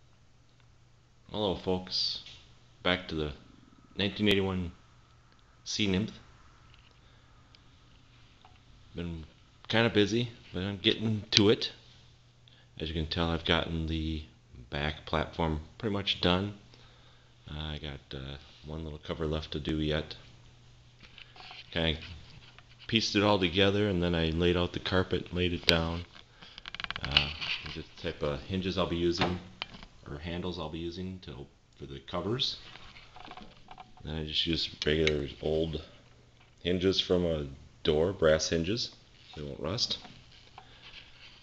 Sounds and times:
Speech: 1.3 - 3.4, 4.0 - 4.8, 5.6 - 6.2, 9.0 - 11.8, 12.8 - 16.6, 17.5 - 20.3, 21.7 - 22.2, 22.9 - 26.1, 27.0 - 32.7, 34.0 - 36.0, 36.6 - 40.1.

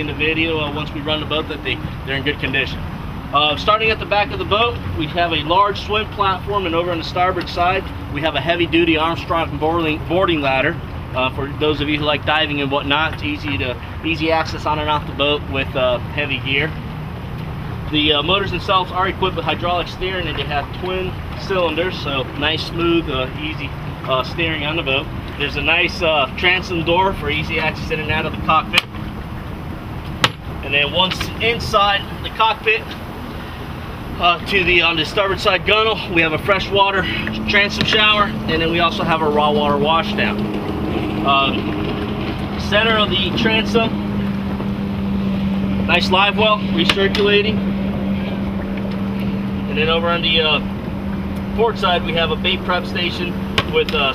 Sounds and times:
Speech: 0.0 - 16.8, 17.9 - 28.8, 30.7 - 32.9, 34.2 - 40.4, 41.2 - 41.6, 42.6 - 43.9, 45.9 - 47.6, 49.7 - 50.6, 51.6 - 54.1.

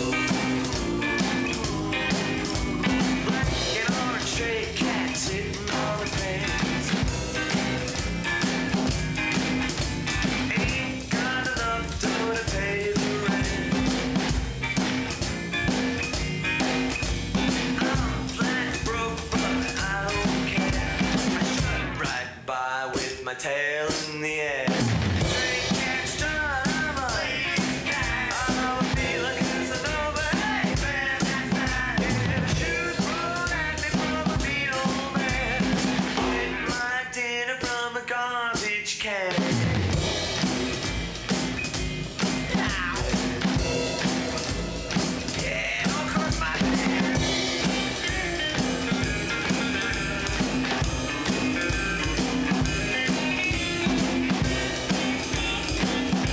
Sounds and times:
Drum: 0.0 - 22.2, 23.9 - 37.0, 38.6 - 56.3
Drum kit: 0.0 - 56.3.

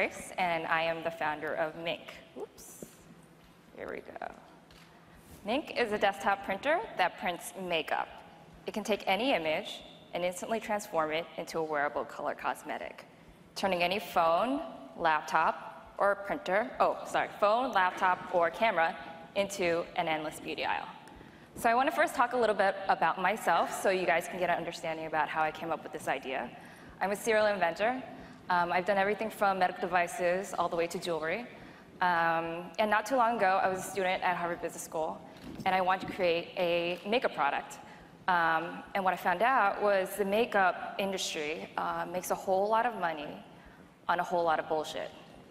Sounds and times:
Speech: 3.8 - 4.5, 5.4 - 13.0, 13.6 - 21.0, 21.6 - 43.4, 44.1 - 45.2.

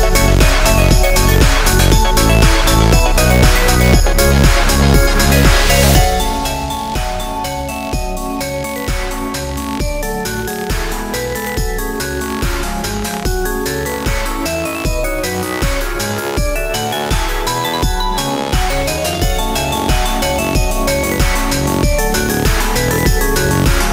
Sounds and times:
Jazz: 0.0 - 23.9
Rhythm and blues: 0.0 - 23.9.

